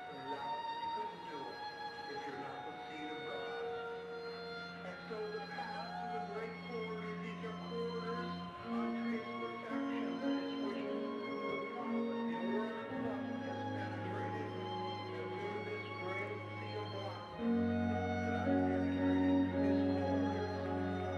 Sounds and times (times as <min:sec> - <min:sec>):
Speech: 0:00.0 - 0:04.1, 0:04.8 - 0:21.1
Music: 0:00.0 - 0:21.1.